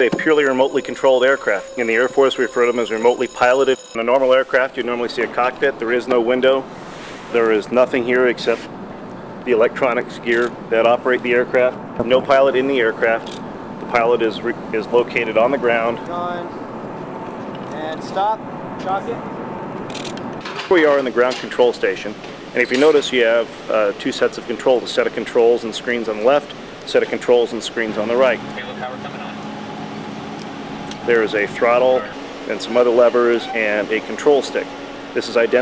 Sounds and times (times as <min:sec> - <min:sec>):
Speech: 0:00.0 - 0:06.6, 0:07.3 - 0:08.7, 0:09.5 - 0:16.6, 0:17.7 - 0:19.2, 0:20.6 - 0:29.4, 0:31.1 - 0:35.6.